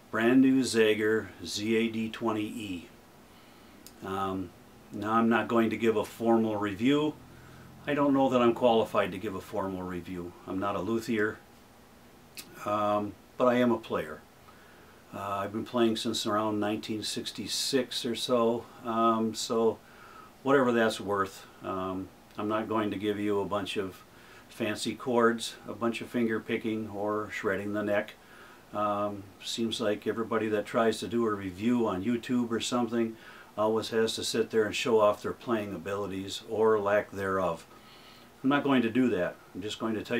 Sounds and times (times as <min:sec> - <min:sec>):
Speech: 0:00.1 - 0:03.0, 0:04.0 - 0:07.2, 0:07.8 - 0:11.4, 0:12.4 - 0:14.2, 0:15.1 - 0:19.8, 0:20.4 - 0:37.7, 0:38.4 - 0:40.1.